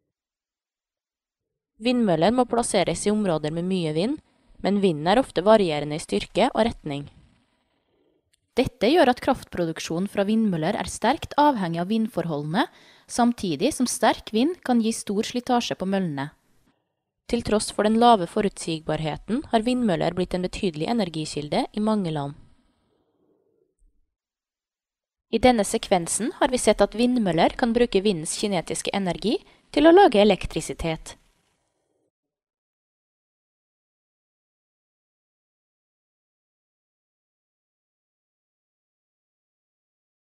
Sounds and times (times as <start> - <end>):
Speech: 1.8 - 7.1, 8.6 - 16.4, 17.3 - 22.4, 25.4 - 31.2.